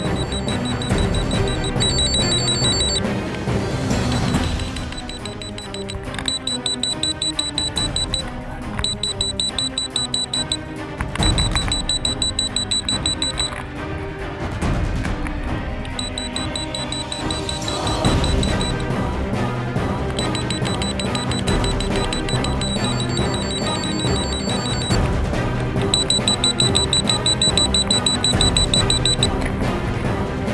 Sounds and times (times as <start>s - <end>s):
Music: 0.0s - 30.5s.